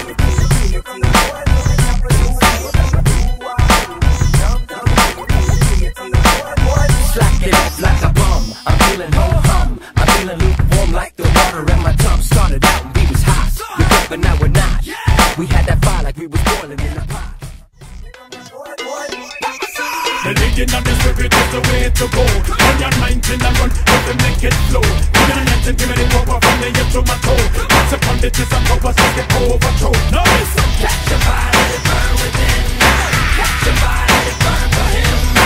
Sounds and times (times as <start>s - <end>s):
Music: 0.0s - 35.4s.